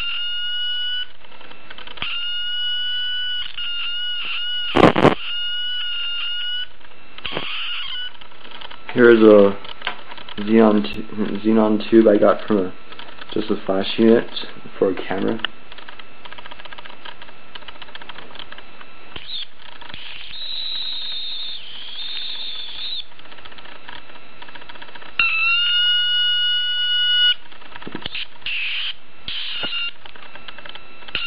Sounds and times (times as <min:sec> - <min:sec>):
Inside, small room: 0:00.0 - 0:31.2.